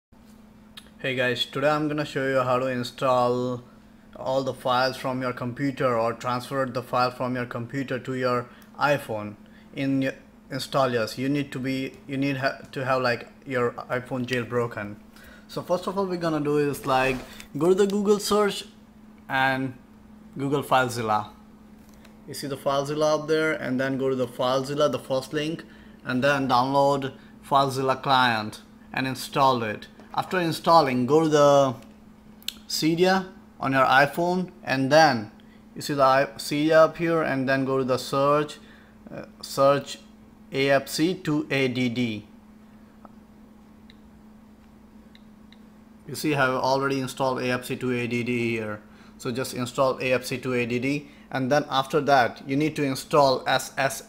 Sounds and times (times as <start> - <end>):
Inside, small room: 0.2 - 54.0
Speech: 0.8 - 19.8, 20.4 - 21.4, 22.3 - 31.9, 32.5 - 42.3, 46.1 - 54.0.